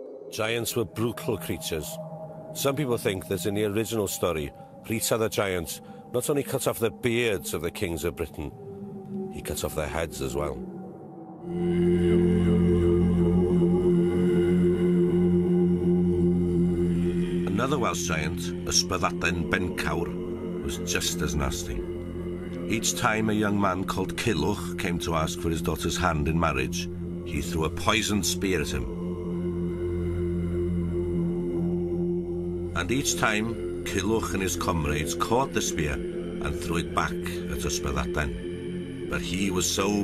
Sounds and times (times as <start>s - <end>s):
Speech: 0.4s - 2.0s, 2.6s - 8.6s, 9.4s - 10.6s, 17.5s - 21.8s, 22.7s - 29.0s, 32.8s - 38.4s, 39.1s - 40.0s.